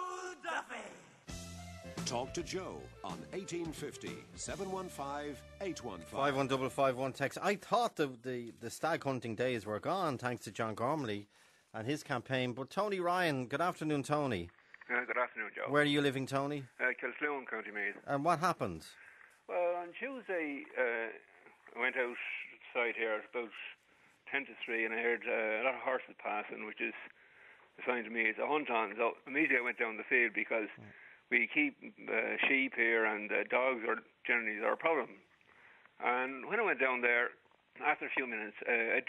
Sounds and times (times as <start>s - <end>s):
Speech: 2.0s - 27.1s, 27.8s - 35.3s, 36.0s - 39.0s.